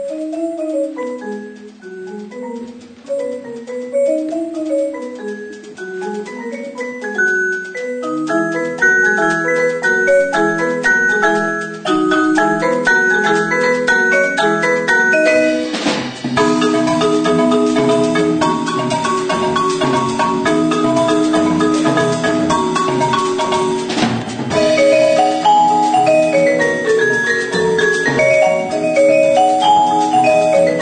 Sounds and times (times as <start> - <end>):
Marimba, xylophone: 0.0 - 30.8.